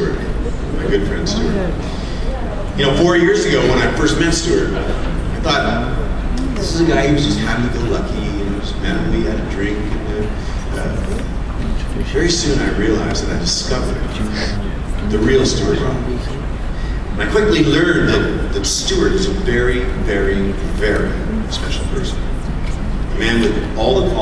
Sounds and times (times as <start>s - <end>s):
Male speech, man speaking: 0.0s - 1.8s, 2.8s - 6.0s, 6.6s - 11.2s, 12.0s - 16.4s, 17.2s - 22.3s, 23.1s - 24.2s
Narration, monologue: 0.0s - 4.8s, 5.4s - 24.2s.